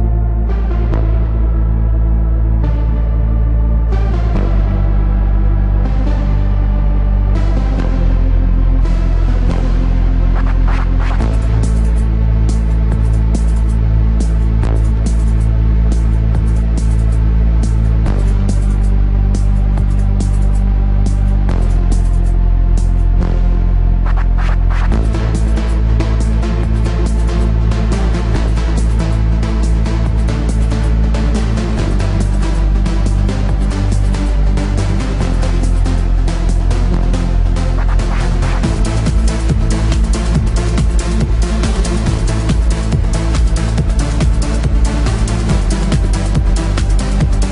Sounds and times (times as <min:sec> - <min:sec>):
Music: 0:00.0 - 0:47.5
Sound effect: 0:00.0 - 0:47.5.